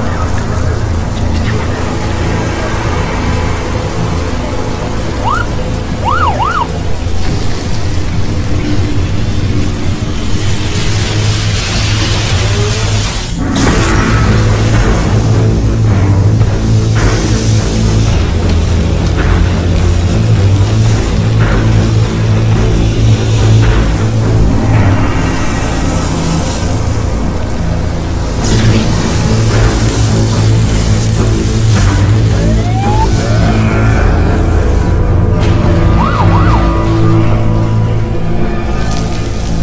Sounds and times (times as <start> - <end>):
Music: 0.0 - 39.6.